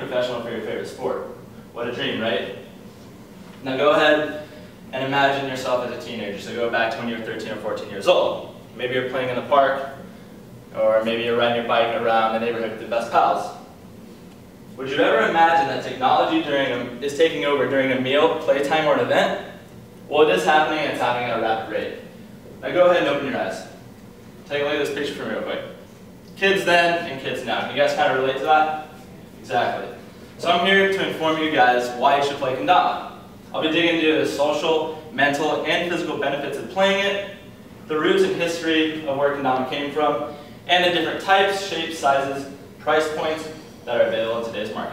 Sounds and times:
Male speech, man speaking: 0:00.0 - 0:02.7, 0:03.6 - 0:10.0, 0:10.7 - 0:13.7, 0:14.8 - 0:23.8, 0:24.5 - 0:25.8, 0:26.4 - 0:44.9.

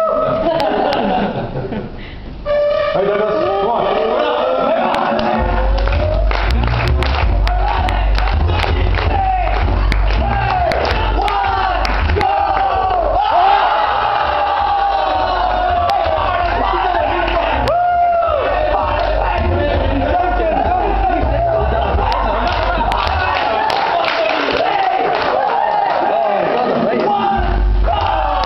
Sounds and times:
Inside, large room or hall: 0:00.0 - 0:28.4
Music: 0:02.3 - 0:24.2, 0:27.2 - 0:28.4.

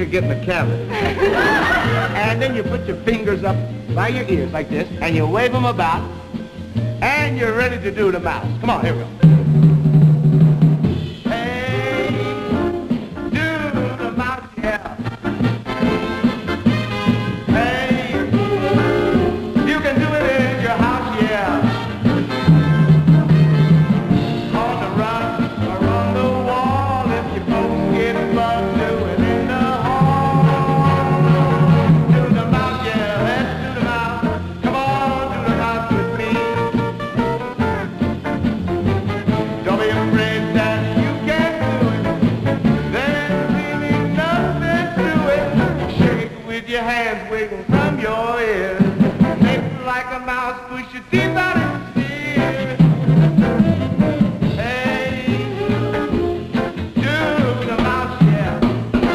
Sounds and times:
Music: 0:00.0 - 0:59.1.

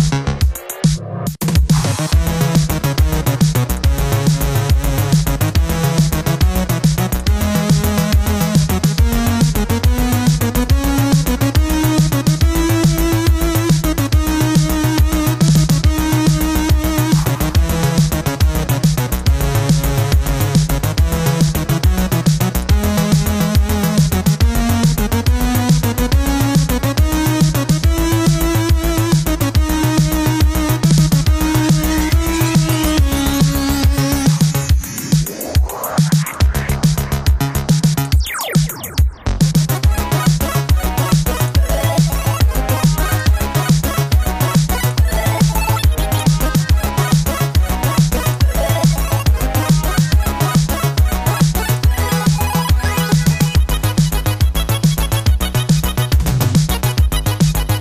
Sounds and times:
Music: 0:00.0 - 0:57.8.

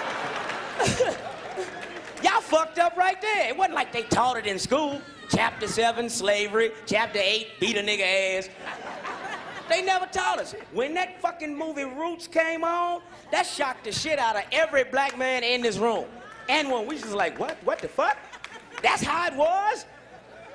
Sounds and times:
Speech: 0:09.7 - 0:18.2, 0:18.8 - 0:19.9.

